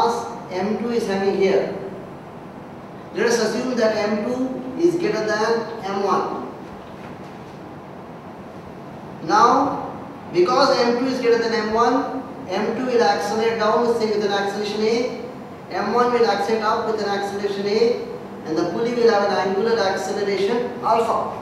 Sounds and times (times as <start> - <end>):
Speech: 0.0 - 1.8, 3.2 - 6.4, 9.2 - 21.4.